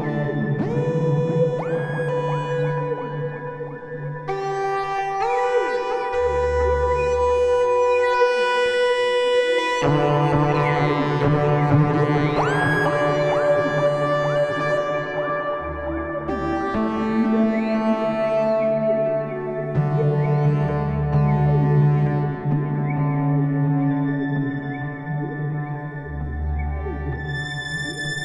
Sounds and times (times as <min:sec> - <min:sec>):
Electronica: 0:00.0 - 0:28.2
Synthesizer: 0:00.0 - 0:28.2.